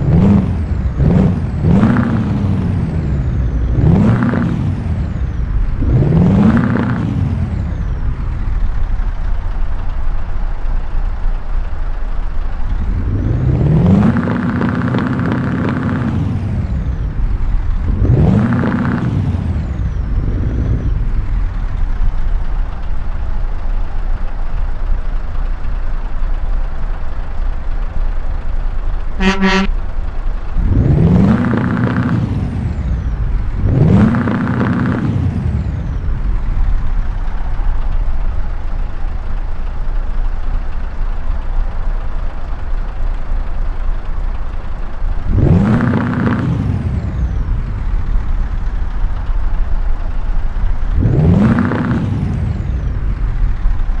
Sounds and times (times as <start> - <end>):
Truck: 0.0 - 54.0.